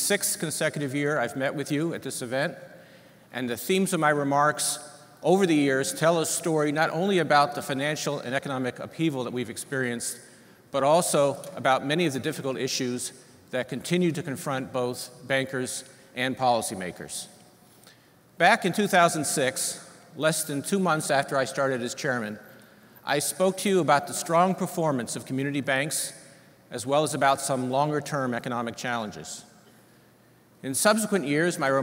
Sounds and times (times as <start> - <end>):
Male speech, man speaking: 0.0 - 2.6, 3.3 - 10.2, 10.8 - 17.4, 18.4 - 22.4, 23.1 - 29.5, 30.6 - 31.8
Narration, monologue: 0.0 - 31.8.